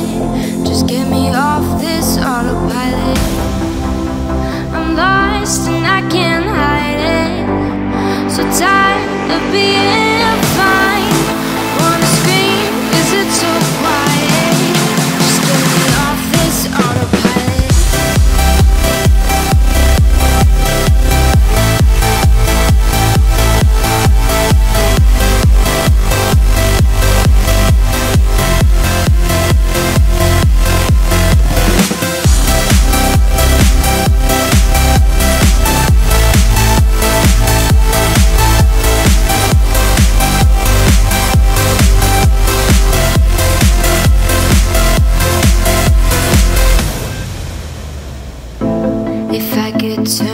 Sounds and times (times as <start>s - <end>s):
Electronic dance music: 0.0s - 50.3s
House music: 0.0s - 50.3s.